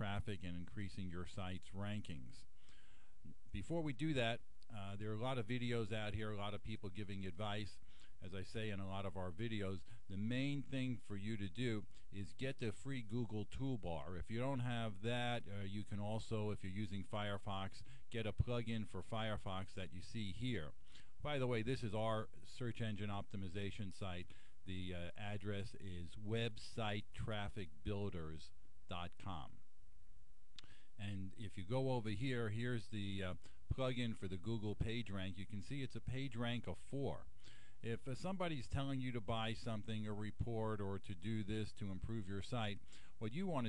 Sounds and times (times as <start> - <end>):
Speech: 0.0 - 2.5, 3.3 - 29.7, 31.0 - 43.6.